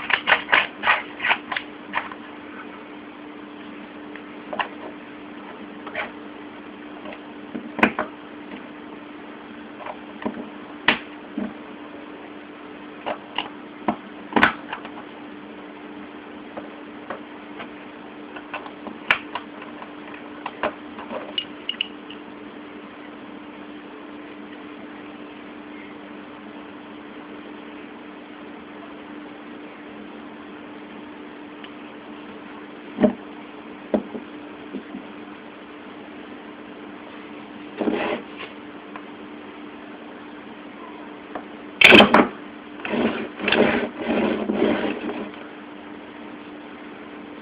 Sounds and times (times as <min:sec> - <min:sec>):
Inside, small room: 0:00.0 - 0:47.4.